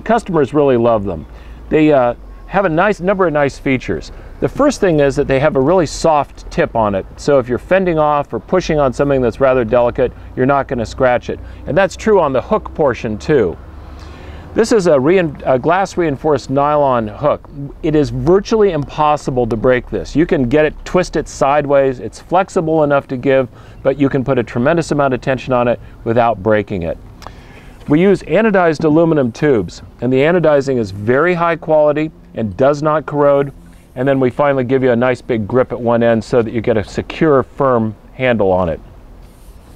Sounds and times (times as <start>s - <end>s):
Speech: 0.0s - 13.6s, 14.6s - 27.0s, 27.9s - 38.8s.